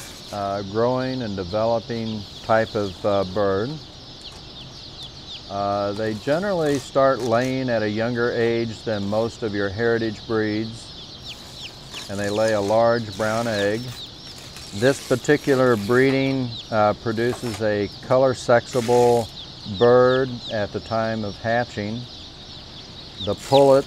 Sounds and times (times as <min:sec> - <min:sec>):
Speech: 0:00.3 - 0:03.8, 0:05.5 - 0:10.9, 0:12.1 - 0:14.0, 0:14.7 - 0:22.1, 0:23.2 - 0:23.8.